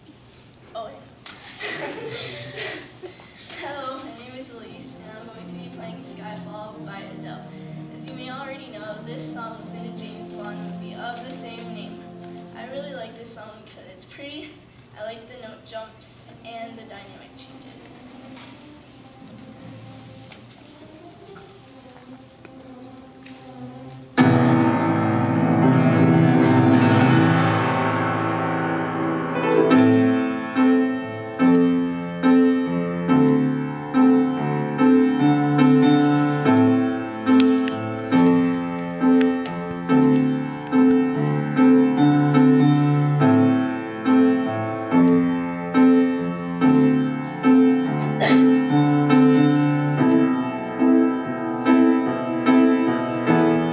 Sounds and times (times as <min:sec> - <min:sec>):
Piano: 0:00.0 - 0:53.7
Speech: 0:12.6 - 0:18.1.